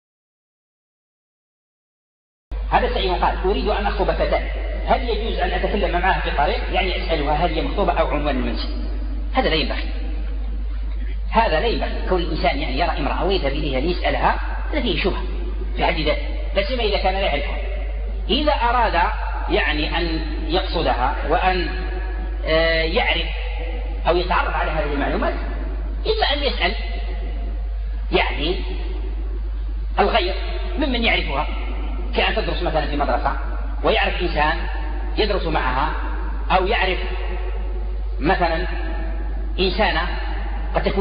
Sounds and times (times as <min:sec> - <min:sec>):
Speech: 0:02.7 - 0:27.3, 0:28.1 - 0:29.0, 0:30.0 - 0:37.4, 0:38.2 - 0:41.0.